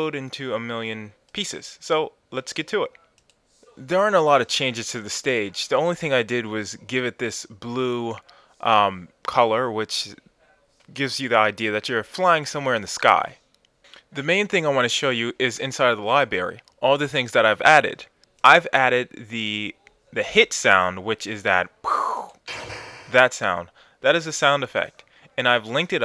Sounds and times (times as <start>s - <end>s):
Speech: 0.0s - 3.0s, 3.7s - 10.2s, 10.9s - 13.4s, 14.2s - 21.8s, 23.1s - 26.0s.